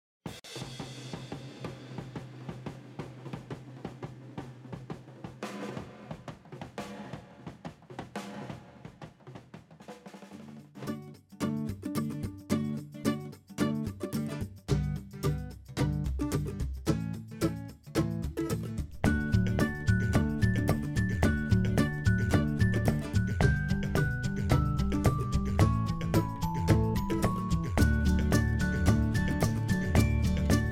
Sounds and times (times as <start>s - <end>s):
Drum kit: 0.2s - 12.7s, 13.9s - 30.7s.